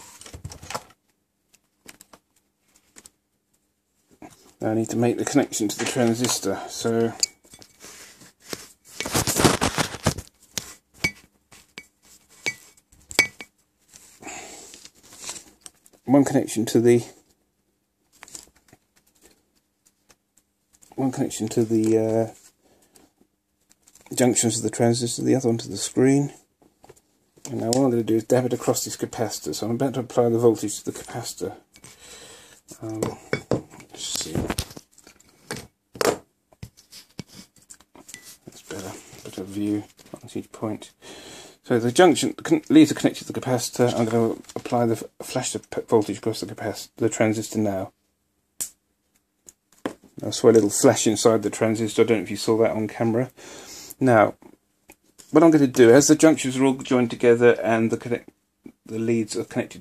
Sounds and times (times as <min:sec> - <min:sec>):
Inside, small room: 0:00.0 - 0:59.8
Speech: 0:04.6 - 0:07.2, 0:16.0 - 0:17.2, 0:21.0 - 0:22.4, 0:24.1 - 0:26.4, 0:27.5 - 0:31.6, 0:32.8 - 0:33.2, 0:33.9 - 0:34.6, 0:38.5 - 0:41.0, 0:41.6 - 0:48.0, 0:50.2 - 0:53.4, 0:54.0 - 0:54.4, 0:55.3 - 0:59.8.